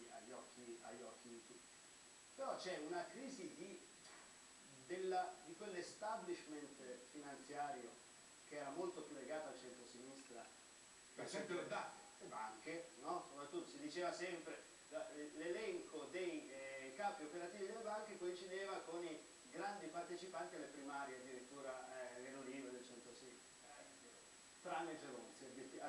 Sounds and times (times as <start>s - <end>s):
Speech: 0.0s - 1.6s, 2.4s - 4.2s, 4.8s - 10.6s, 11.2s - 25.8s.